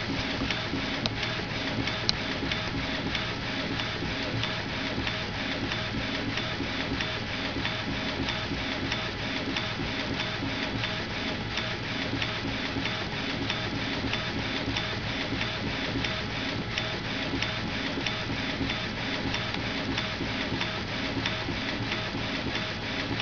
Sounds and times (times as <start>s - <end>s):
Printer: 0.0s - 23.2s.